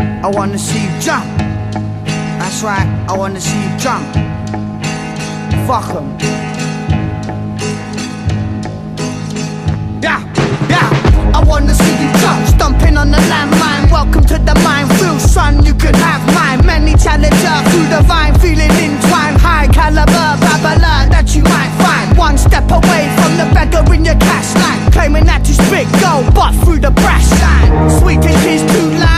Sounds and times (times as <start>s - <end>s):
Music: 0.0s - 29.1s.